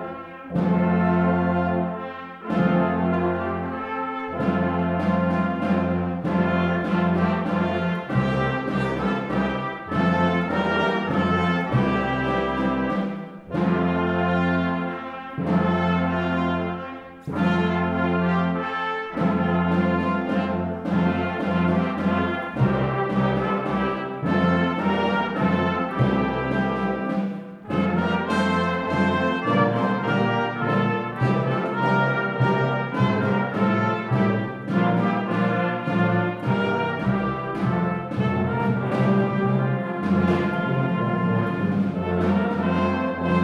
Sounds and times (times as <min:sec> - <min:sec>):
Christmas music: 0:00.0 - 0:43.4.